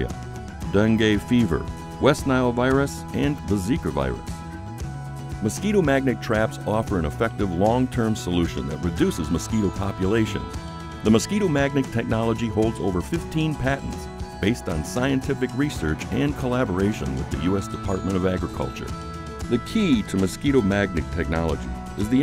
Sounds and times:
Music: 0.0 - 22.2
Speech: 0.7 - 4.2, 5.4 - 18.9, 19.5 - 22.2.

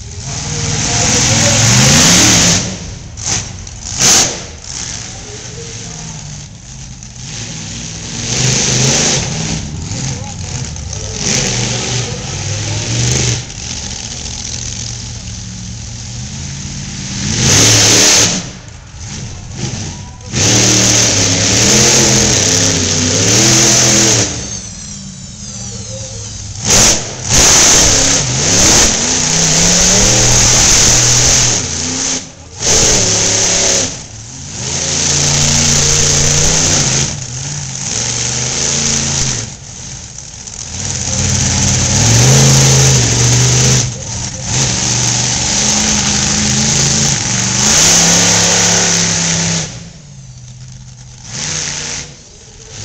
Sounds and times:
Truck: 0.0 - 52.8.

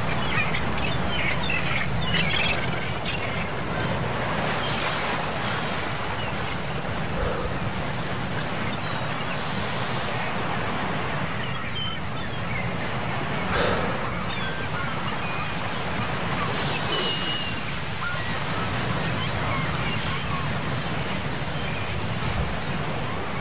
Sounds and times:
Outside, rural or natural: 0.0 - 23.4.

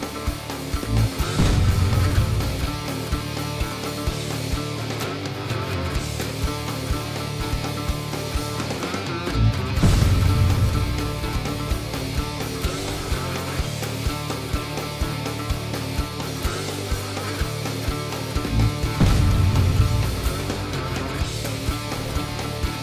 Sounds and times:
Music: 0.0 - 22.8.

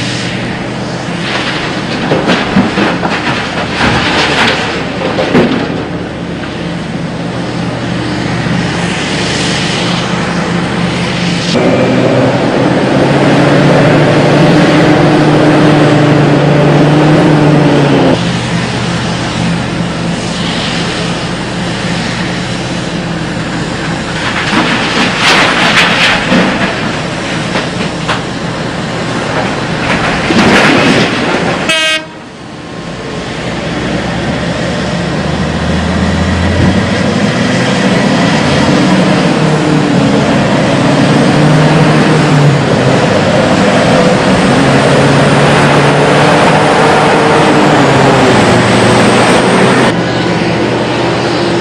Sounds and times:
Outside, rural or natural: 0.0 - 51.6.

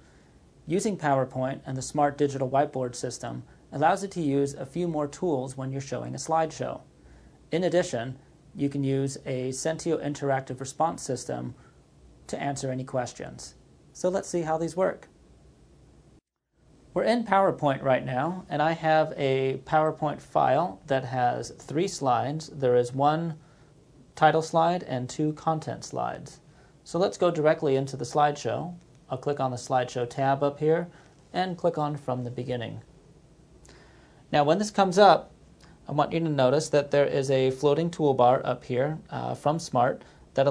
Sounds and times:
Speech: 0.7 - 6.9, 7.5 - 11.6, 12.3 - 15.1, 16.9 - 23.4, 24.1 - 32.9, 34.3 - 40.5.

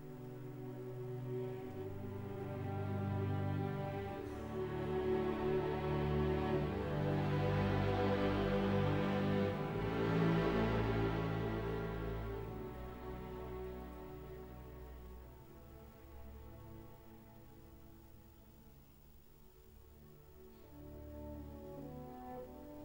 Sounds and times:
Music: 0.0 - 22.8.

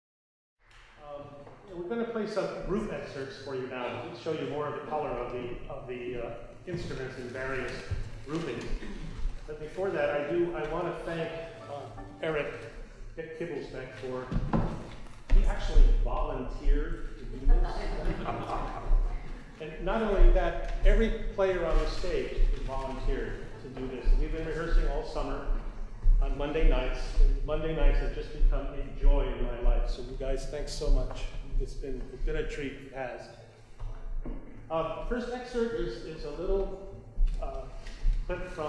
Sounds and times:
Speech: 1.0 - 33.5, 34.7 - 38.6.

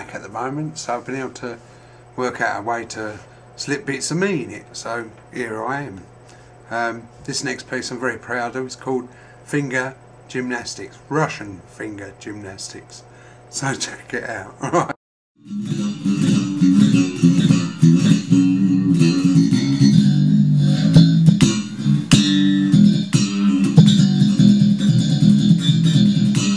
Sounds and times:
Speech: 0.0 - 1.6, 2.2 - 6.1, 6.7 - 14.7.

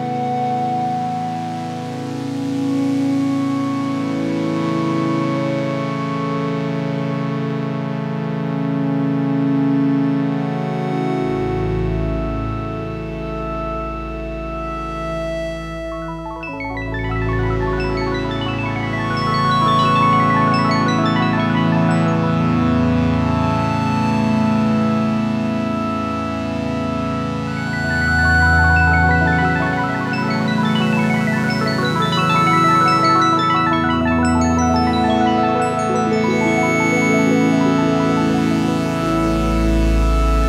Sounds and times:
Music: 0.0 - 40.4.

